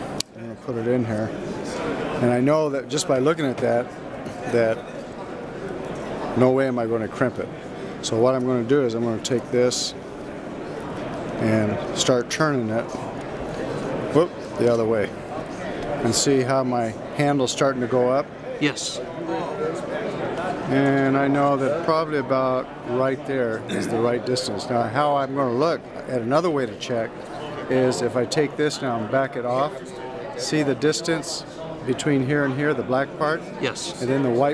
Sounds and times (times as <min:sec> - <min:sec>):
Speech: 0:20.7 - 0:27.1.